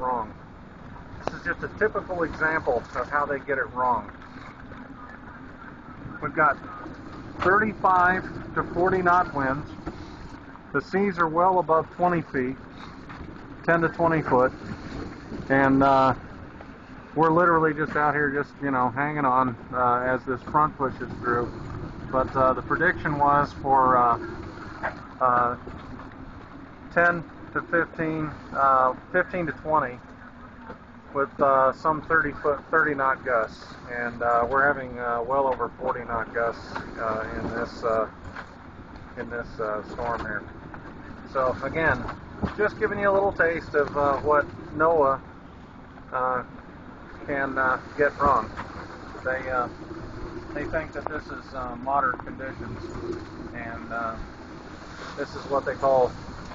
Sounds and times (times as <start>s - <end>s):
Speech: 0.0s - 0.4s, 1.2s - 4.2s, 6.1s - 9.7s, 10.7s - 12.6s, 13.6s - 14.6s, 15.5s - 16.2s, 17.2s - 24.3s, 25.2s - 25.6s, 26.9s - 30.0s, 31.2s - 38.1s, 39.2s - 40.5s, 41.3s - 45.2s, 46.1s - 46.5s, 47.2s - 48.5s, 49.2s - 49.8s, 50.6s - 52.9s, 53.6s - 54.2s, 55.2s - 56.2s
Boat, Water vehicle: 0.0s - 56.5s.